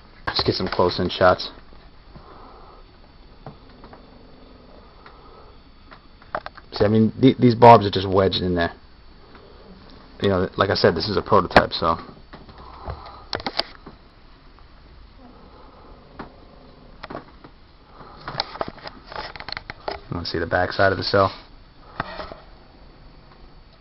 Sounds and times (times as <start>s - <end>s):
Inside, small room: 0.0s - 23.8s
Speech: 0.3s - 1.6s, 6.8s - 8.8s, 10.2s - 12.1s, 20.1s - 21.4s.